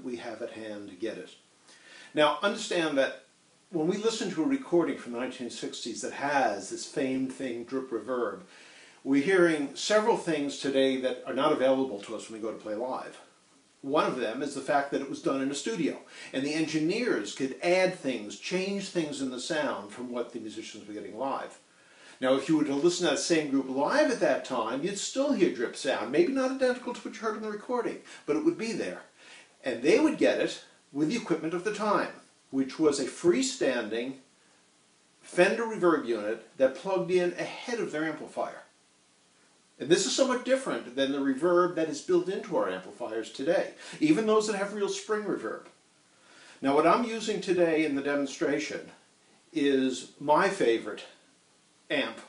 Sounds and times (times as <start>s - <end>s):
Speech: 0.0s - 1.4s, 2.1s - 21.6s, 22.2s - 34.3s, 35.2s - 38.8s, 39.8s - 45.8s, 46.6s - 49.0s, 49.6s - 51.2s, 51.9s - 52.2s.